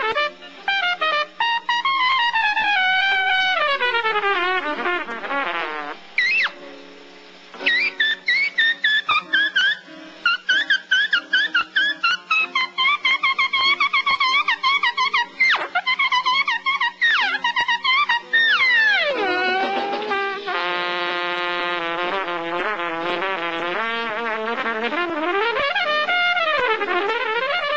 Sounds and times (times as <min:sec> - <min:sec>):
Trumpet: 0:00.0 - 0:06.6, 0:07.6 - 0:27.7
Jazz: 0:00.0 - 0:27.7.